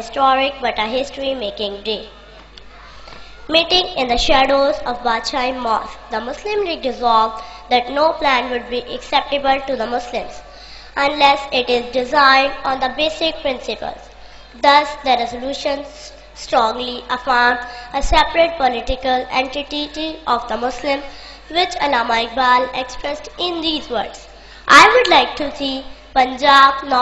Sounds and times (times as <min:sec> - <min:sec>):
Child speech, kid speaking: 0:00.0 - 0:02.1, 0:03.5 - 0:10.4, 0:11.0 - 0:14.0, 0:14.6 - 0:27.0
Female speech, woman speaking: 0:00.0 - 0:02.1, 0:03.5 - 0:10.4, 0:11.0 - 0:14.0, 0:16.5 - 0:27.0
Narration, monologue: 0:00.0 - 0:27.0.